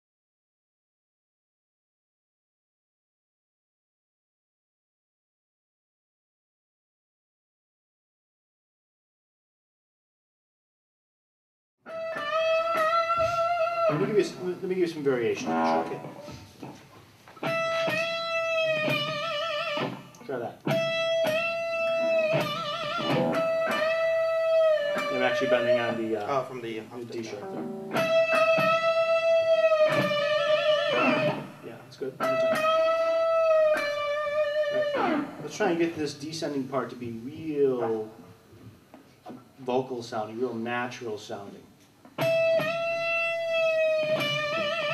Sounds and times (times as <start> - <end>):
Electric guitar: 11.9 - 35.8, 42.0 - 44.9
Speech: 13.9 - 16.4, 20.2 - 20.6, 25.1 - 27.6, 31.6 - 32.2, 35.4 - 38.2, 39.6 - 41.7.